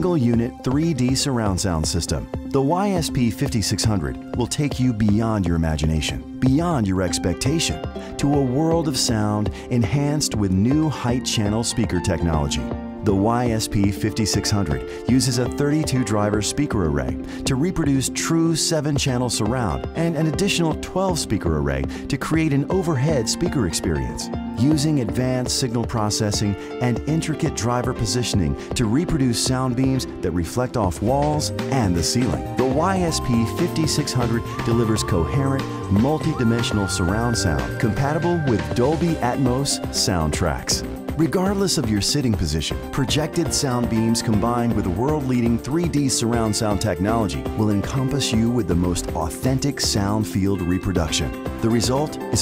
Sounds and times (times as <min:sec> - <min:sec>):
Music: 0:00.0 - 0:52.4
Speech: 0:00.0 - 0:52.4.